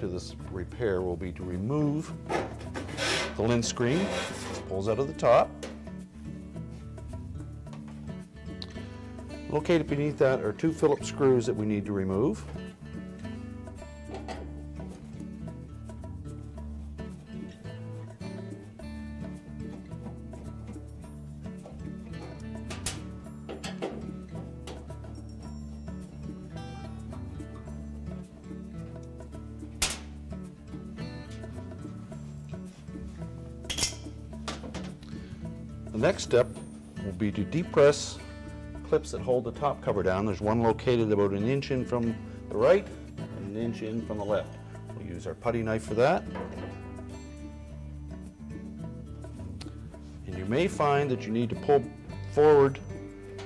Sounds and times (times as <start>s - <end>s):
Music: 0.0s - 53.4s.